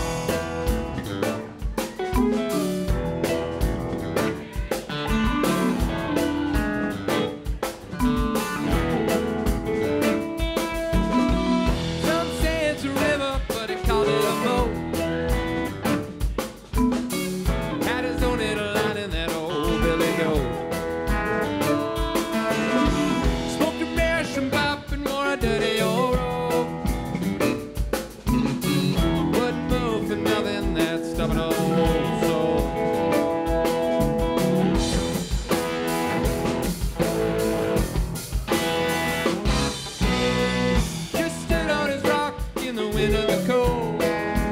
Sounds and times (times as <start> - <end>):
Music: 0.0 - 44.5.